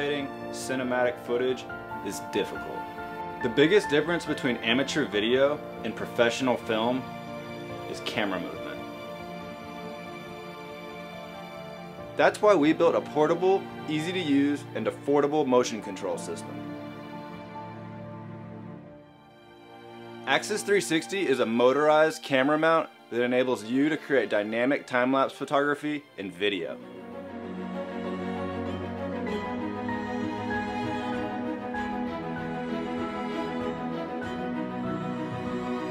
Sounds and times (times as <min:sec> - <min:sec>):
Speech: 0:00.0 - 0:02.8, 0:03.4 - 0:07.1, 0:07.9 - 0:08.8, 0:12.2 - 0:16.5, 0:20.3 - 0:26.8
Music: 0:00.0 - 0:35.9.